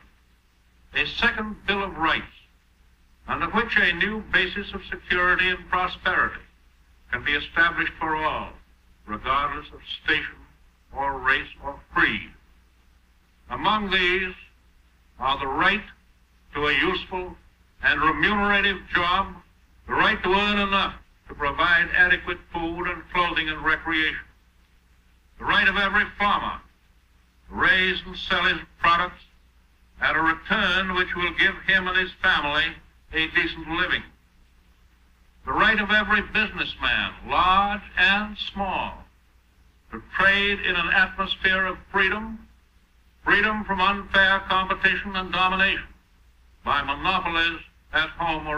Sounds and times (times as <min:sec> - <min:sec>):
Narration, monologue: 0:00.0 - 0:48.5
Male speech, man speaking: 0:01.0 - 0:02.5, 0:03.3 - 0:06.5, 0:07.1 - 0:12.4, 0:13.5 - 0:14.5, 0:15.2 - 0:24.3, 0:25.4 - 0:26.7, 0:27.5 - 0:29.3, 0:30.0 - 0:34.1, 0:35.5 - 0:39.1, 0:39.9 - 0:42.5, 0:43.2 - 0:46.0, 0:46.7 - 0:48.5.